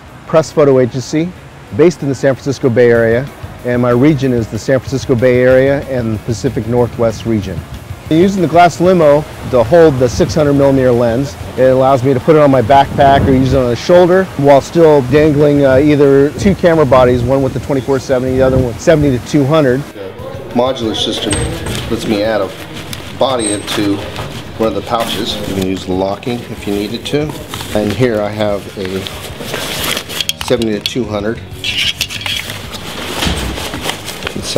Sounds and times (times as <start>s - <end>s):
Speech: 0.3s - 22.6s, 23.2s - 29.1s
Music: 1.4s - 12.5s, 14.8s - 34.5s.